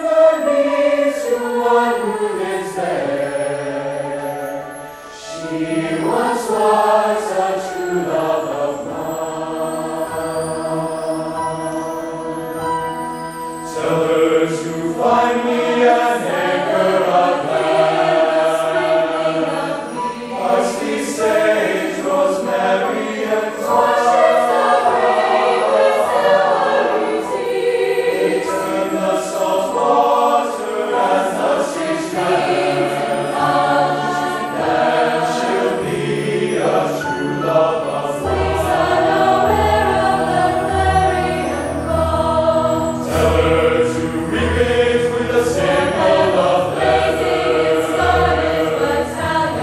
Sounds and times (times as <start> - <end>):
Music: 0.0 - 49.6.